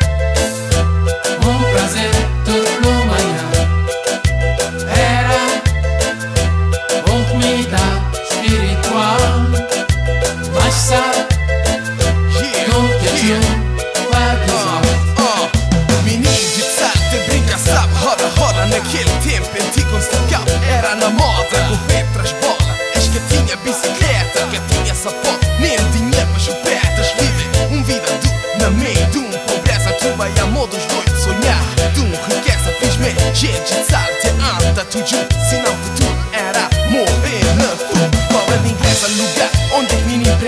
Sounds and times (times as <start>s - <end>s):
Music of Latin America: 0.0s - 40.4s.